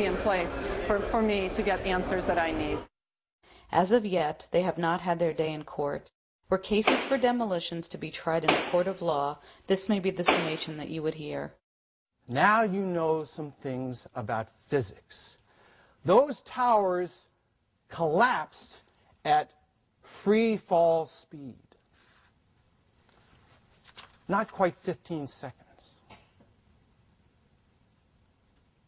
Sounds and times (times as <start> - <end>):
Speech: 12.3 - 15.4, 24.3 - 26.0.